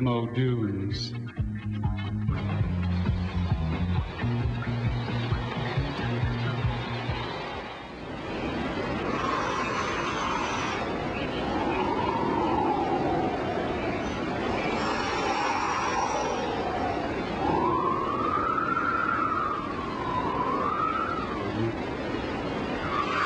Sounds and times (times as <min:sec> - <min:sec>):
Speech: 0:00.0 - 0:01.2
Music: 0:00.8 - 0:07.5.